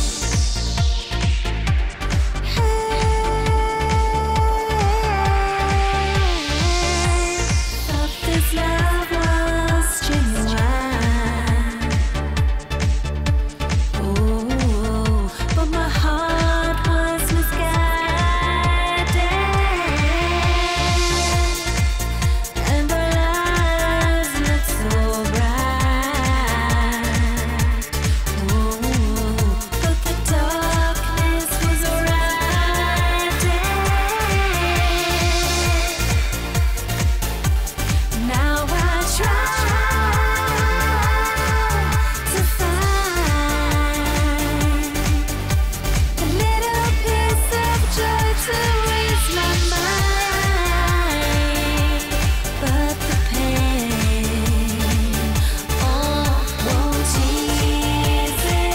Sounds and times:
Music: 0.0s - 58.7s.

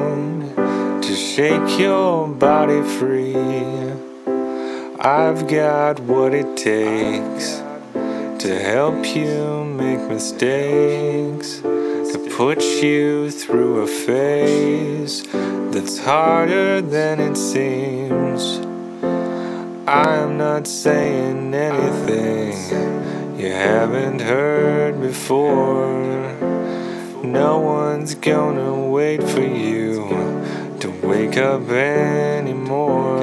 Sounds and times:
Music: 0.0s - 33.2s.

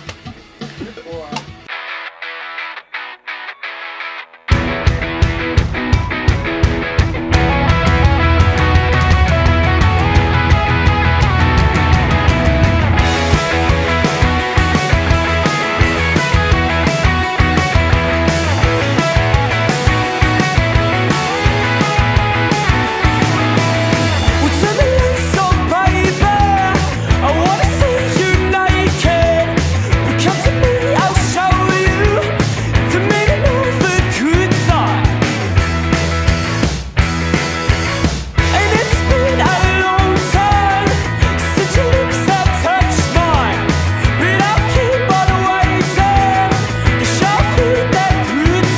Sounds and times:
Music: 0.0s - 48.7s.

